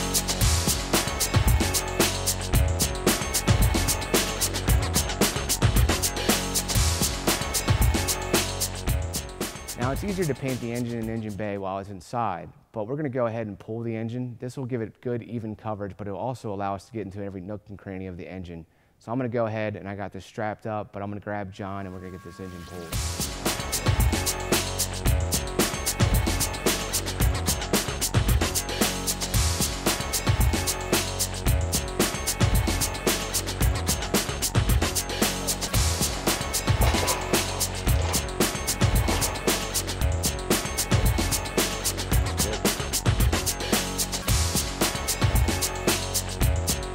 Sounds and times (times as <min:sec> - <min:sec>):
Music: 0:00.0 - 0:11.6, 0:21.8 - 0:46.9
Speech: 0:09.8 - 0:23.0.